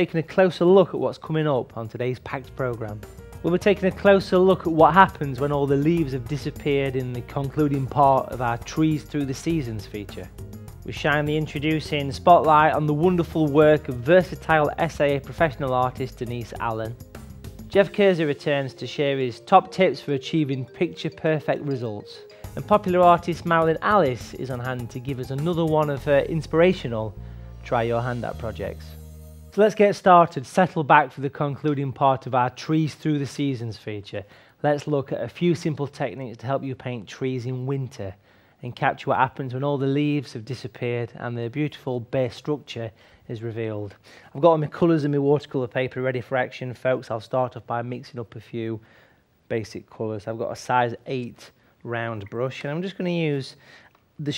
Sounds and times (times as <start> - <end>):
Speech: 0.0 - 10.3, 10.9 - 17.0, 17.7 - 29.0, 29.6 - 48.8, 49.5 - 53.6
Music: 0.0 - 34.1.